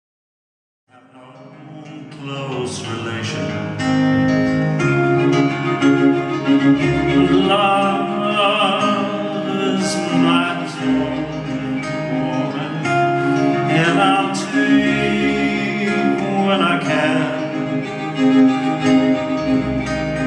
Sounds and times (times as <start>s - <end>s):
String section: 1.2s - 20.2s
Double bass: 2.7s - 20.2s.